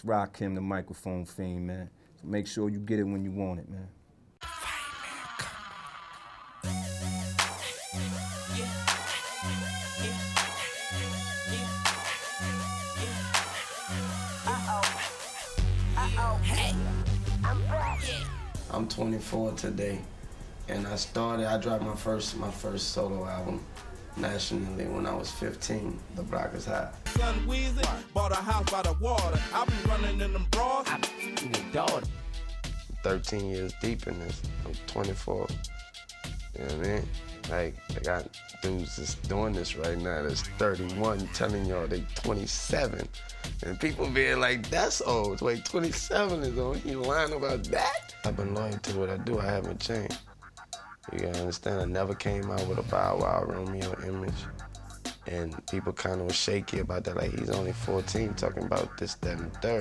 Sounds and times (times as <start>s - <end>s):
Speech: 0.0s - 3.9s, 17.5s - 20.1s, 20.7s - 23.6s, 24.2s - 27.0s, 33.0s - 35.6s, 36.6s - 50.2s, 51.1s - 54.5s, 55.3s - 59.8s
Music: 6.6s - 59.8s.